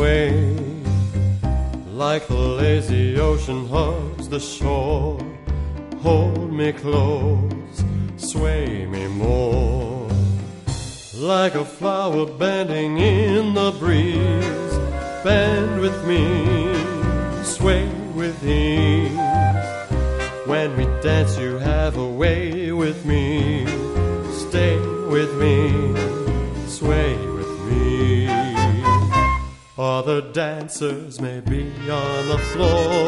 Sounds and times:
Male singing: 0.0s - 1.0s, 1.9s - 10.4s, 11.1s - 19.6s, 20.2s - 33.0s
Music: 0.0s - 33.0s.

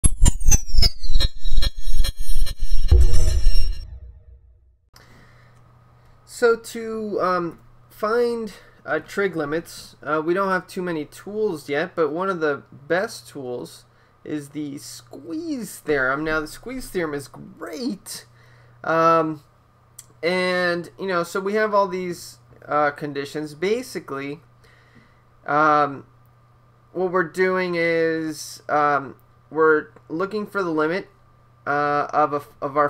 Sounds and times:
Music: 0.2s - 4.7s
Speech: 6.3s - 24.5s, 25.4s - 26.1s, 27.0s - 32.8s.

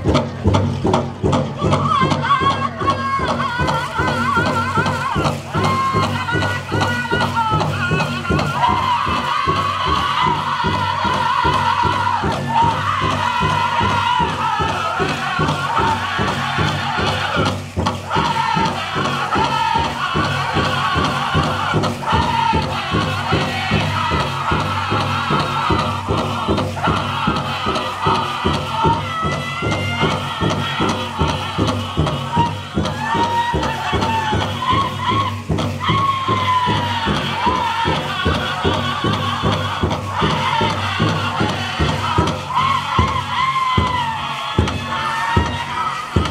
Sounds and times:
Music: 0.0s - 46.3s.

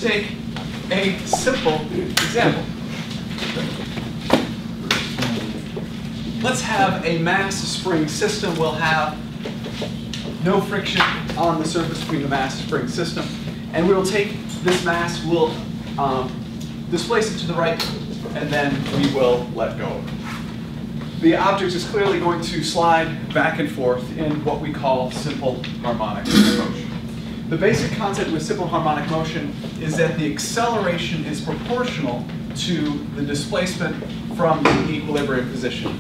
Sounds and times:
Speech: 0.0s - 2.8s, 5.2s - 5.7s, 6.4s - 9.2s, 10.4s - 20.1s, 21.2s - 36.0s.

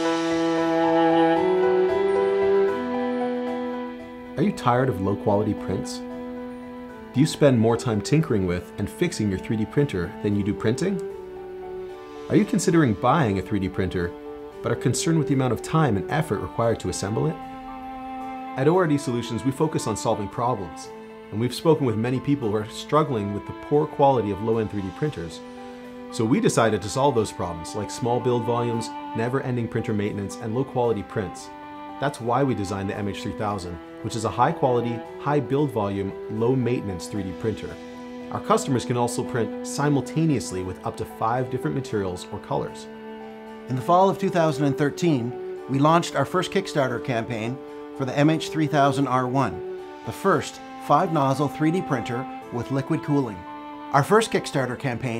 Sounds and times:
Music: 0.0s - 55.1s
Speech: 4.4s - 6.1s, 7.1s - 11.0s, 12.3s - 17.4s, 18.6s - 25.4s, 26.1s - 42.9s, 43.7s - 55.1s.

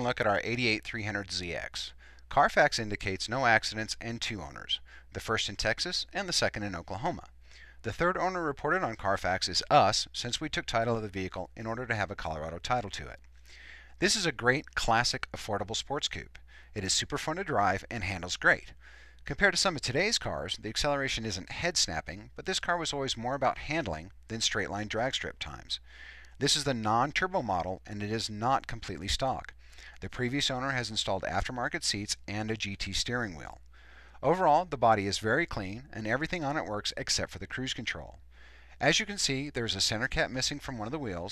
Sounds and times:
Speech: 0.0s - 13.2s, 14.0s - 25.8s, 26.4s - 33.6s, 34.2s - 38.2s, 38.8s - 41.3s.

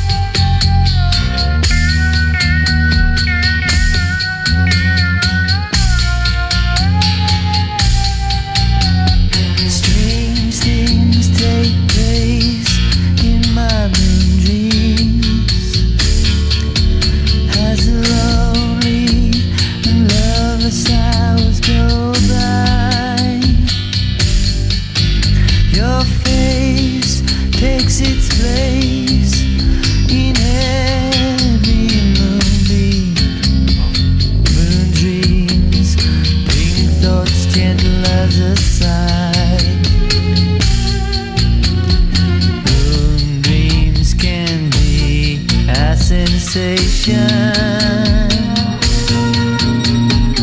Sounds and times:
Music: 0.0s - 50.4s.

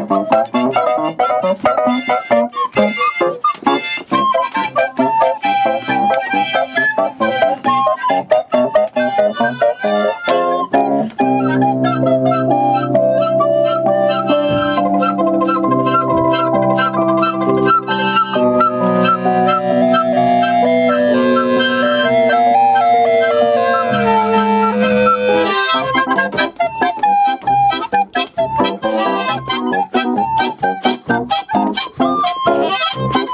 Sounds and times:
Music: 0.0s - 33.3s.

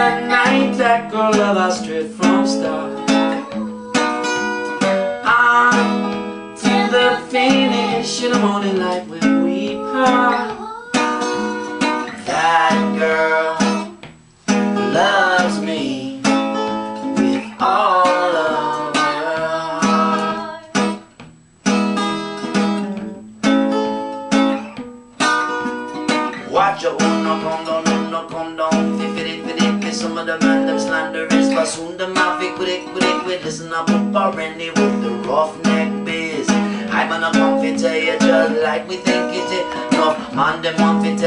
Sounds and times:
Music: 0.0s - 41.2s.

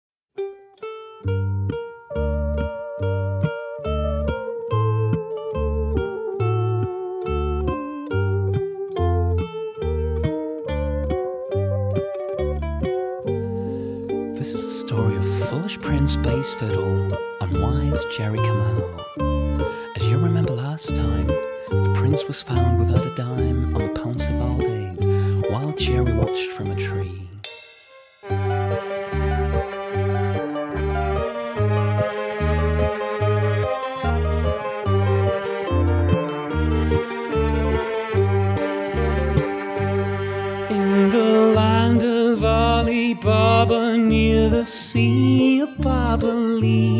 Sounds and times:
Mandolin: 0.4s - 46.9s.

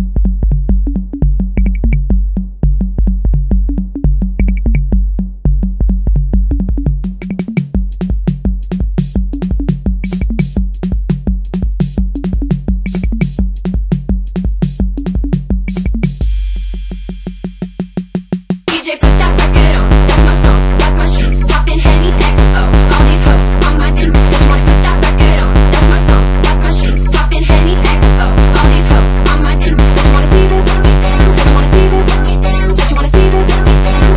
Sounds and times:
Drum machine: 0.0s - 34.1s
Sampler: 0.9s - 2.0s, 6.5s - 7.7s, 12.2s - 13.4s, 18.7s - 34.1s.

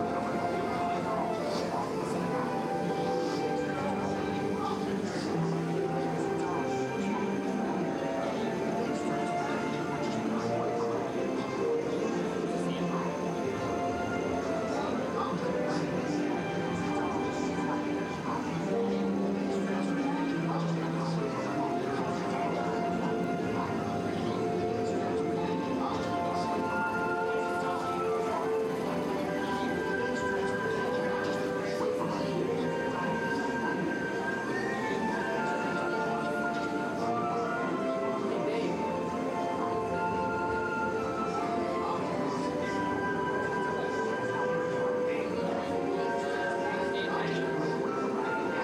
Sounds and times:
Music: 0.0s - 48.6s
Speech: 0.0s - 48.6s.

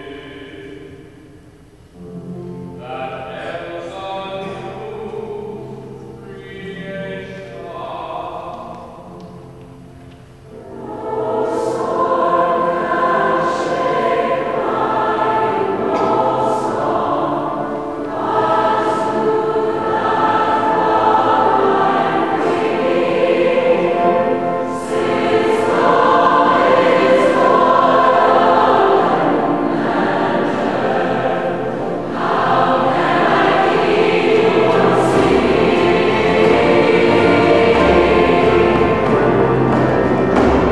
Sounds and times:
Choir: 0.0s - 1.4s, 2.0s - 9.6s, 10.5s - 40.7s.

